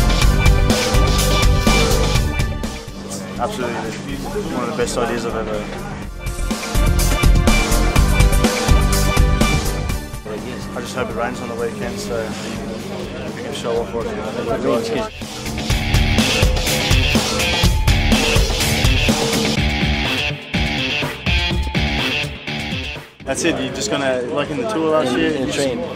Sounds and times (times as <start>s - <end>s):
Music: 0.0s - 25.9s
Speech: 3.2s - 6.0s, 10.2s - 15.1s, 23.2s - 25.9s.